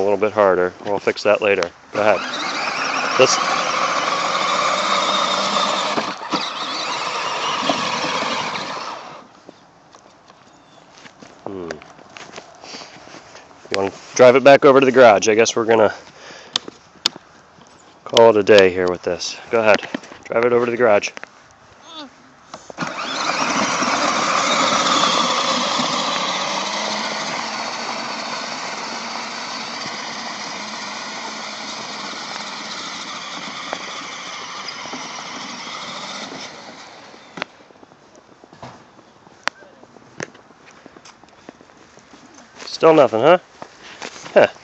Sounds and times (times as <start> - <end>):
Car: 2.0 - 9.4, 22.4 - 37.6.